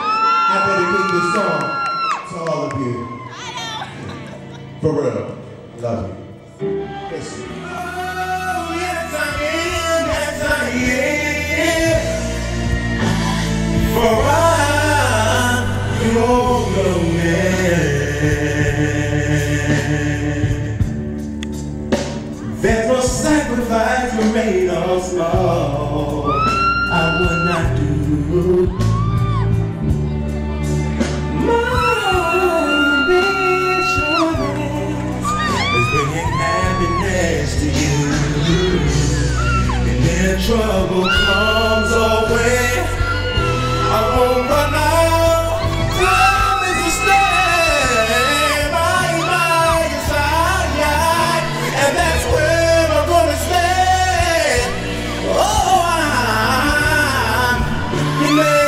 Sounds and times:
Music: 0.0s - 58.6s
Singing: 6.9s - 21.1s, 22.4s - 29.7s, 31.3s - 58.6s.

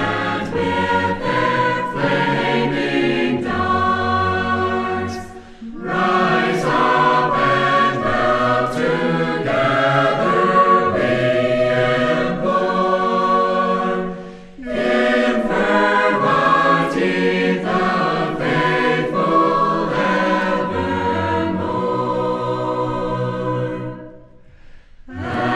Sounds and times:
Music: 0.0s - 25.5s.

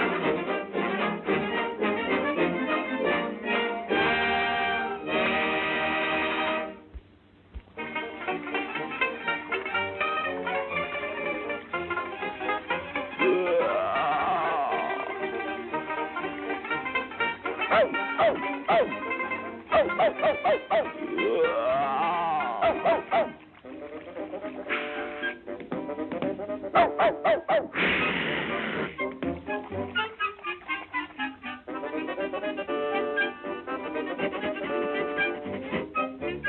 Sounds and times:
Music: 0.0s - 36.4s.

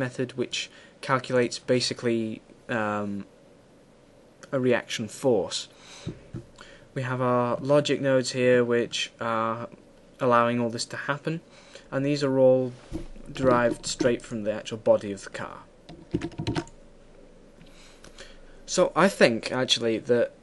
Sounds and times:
Speech: 0.0s - 3.3s, 4.4s - 5.8s, 7.0s - 15.7s, 18.7s - 20.4s.

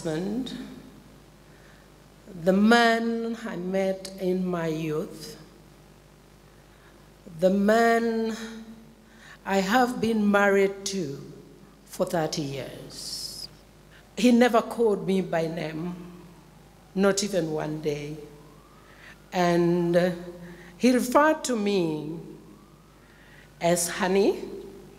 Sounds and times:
Speech: 0.0s - 0.8s, 2.3s - 5.4s, 7.3s - 8.7s, 9.5s - 13.5s, 14.2s - 16.0s, 17.0s - 18.2s, 19.4s - 22.3s, 23.6s - 24.6s.

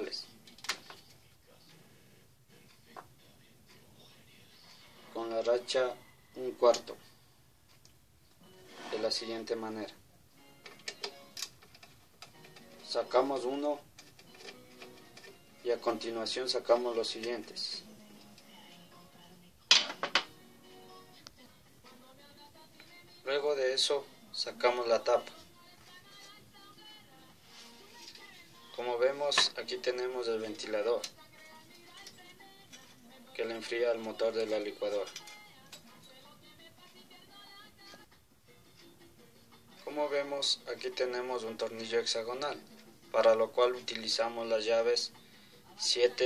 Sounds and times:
Speech: 0.0s - 7.0s, 8.8s - 10.0s, 12.8s - 13.9s, 15.6s - 17.9s, 23.2s - 25.4s, 28.8s - 31.2s, 33.4s - 35.2s, 39.8s - 45.1s, 45.8s - 46.2s
Music: 0.0s - 46.2s.

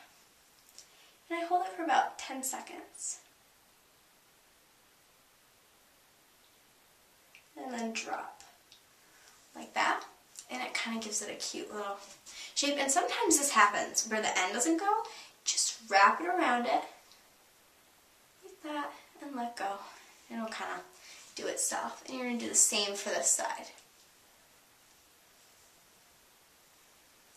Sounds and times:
Speech: 1.3s - 3.3s, 7.6s - 8.6s, 9.5s - 17.0s, 18.4s - 23.8s.

